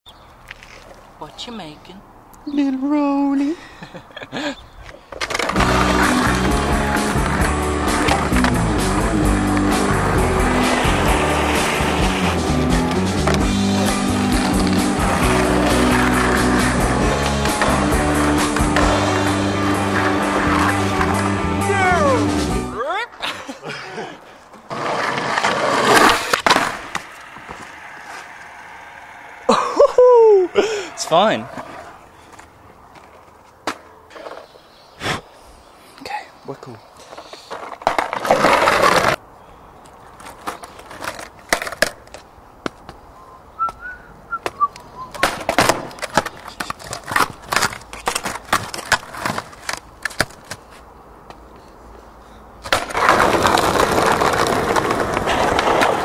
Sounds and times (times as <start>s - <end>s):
Skateboard: 4.8s - 22.2s, 24.5s - 34.5s, 37.1s - 39.2s, 40.1s - 42.9s, 43.6s - 50.8s, 52.6s - 56.0s.